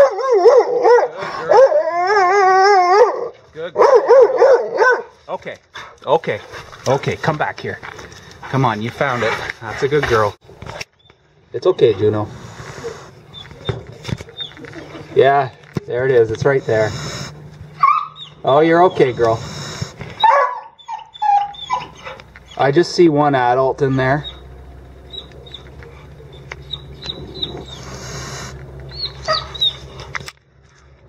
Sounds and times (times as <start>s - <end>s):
Bow-wow: 0.0s - 5.1s, 20.2s - 22.2s, 29.2s - 29.6s.